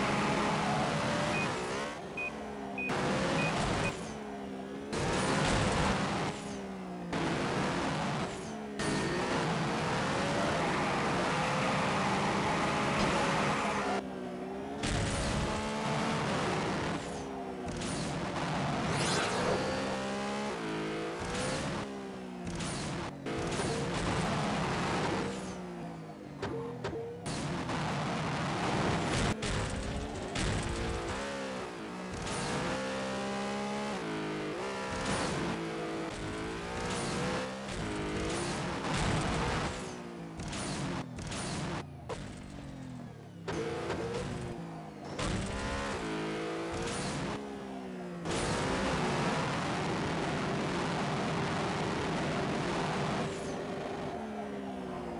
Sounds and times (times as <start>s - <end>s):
Car: 0.0s - 55.1s.